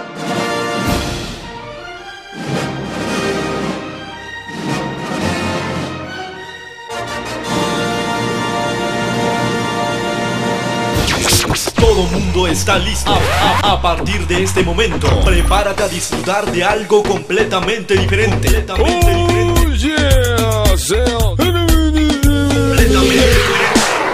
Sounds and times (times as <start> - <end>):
Music of Africa: 15.0 - 23.9.